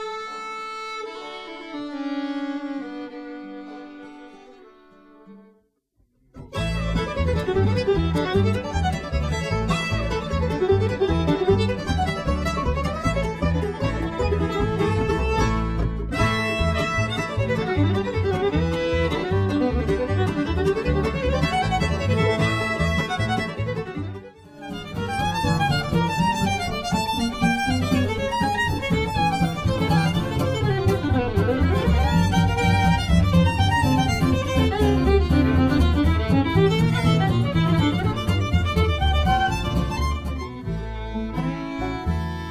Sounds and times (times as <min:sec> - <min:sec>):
Violin, fiddle: 0:00.0 - 0:05.6, 0:06.4 - 0:42.5.